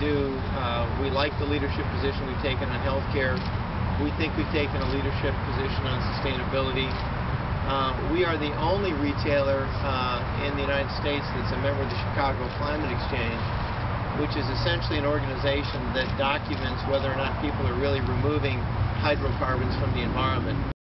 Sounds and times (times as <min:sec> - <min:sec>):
Speech: 0:00.0 - 0:07.0, 0:07.7 - 0:13.5, 0:14.2 - 0:20.7
Vehicle: 0:00.0 - 0:20.8.